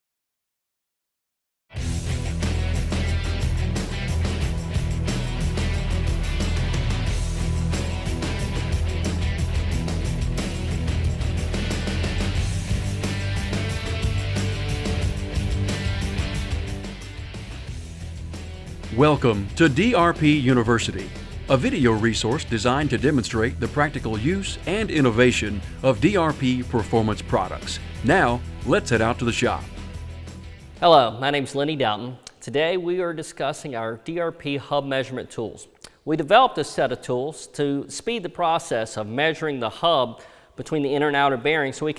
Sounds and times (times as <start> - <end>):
Music: 1.7 - 31.4
Speech: 18.9 - 29.7, 30.8 - 41.9.